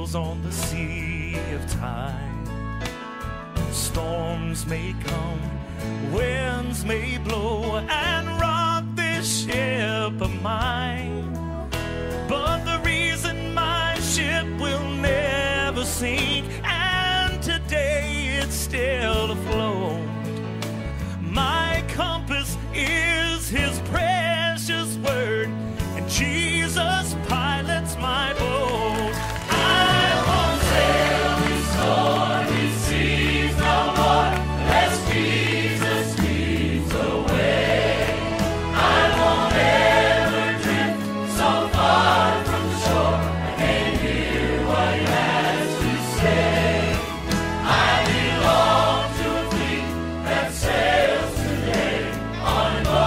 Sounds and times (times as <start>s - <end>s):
Music: 0.0s - 53.0s.